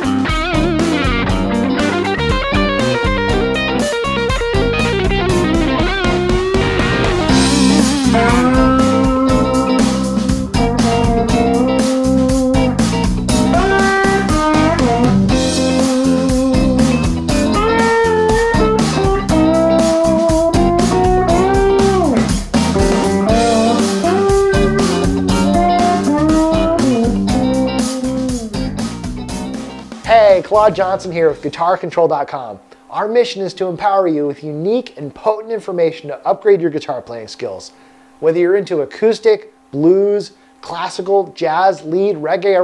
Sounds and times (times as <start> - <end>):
Electric guitar: 0.0 - 31.2.